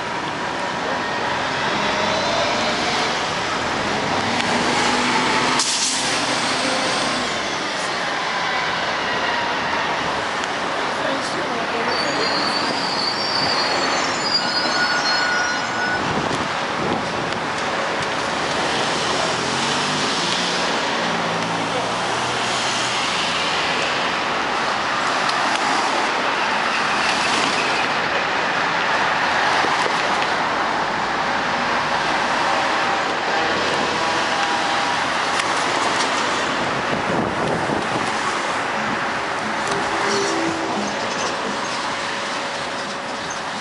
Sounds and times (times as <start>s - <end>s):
Vehicle: 0.0s - 43.6s.